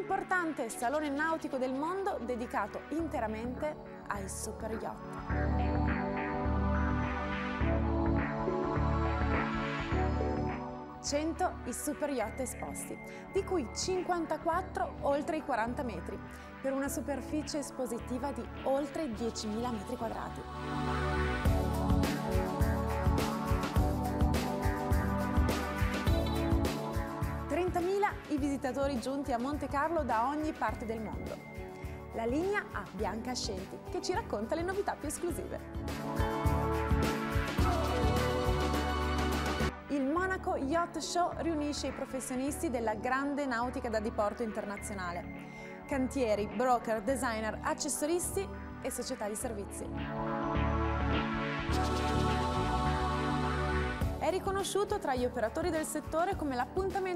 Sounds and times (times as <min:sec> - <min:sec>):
Speech: 0:00.0 - 0:05.0, 0:11.1 - 0:20.4, 0:27.5 - 0:31.4, 0:32.2 - 0:35.6, 0:39.9 - 0:45.3, 0:45.9 - 0:49.9, 0:54.2 - 0:57.1
Music: 0:00.0 - 0:57.1.